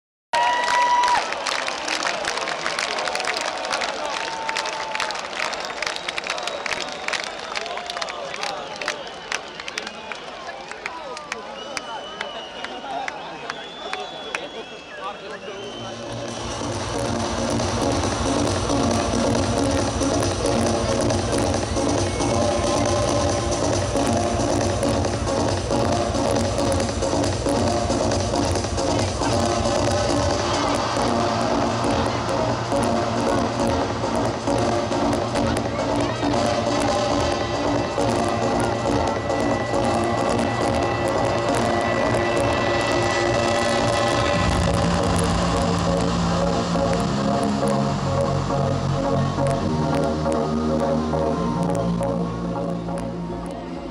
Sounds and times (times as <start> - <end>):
Music: 14.4 - 53.9.